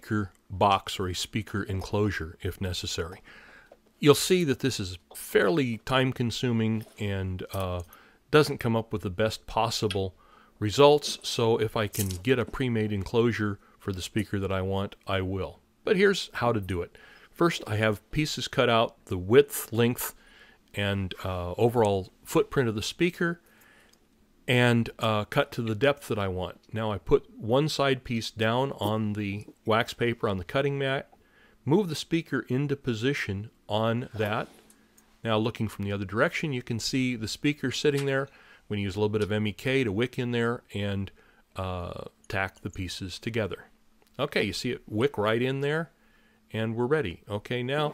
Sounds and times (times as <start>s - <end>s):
Speech: 0.0s - 3.2s, 4.0s - 23.4s, 24.5s - 34.6s, 35.2s - 47.9s.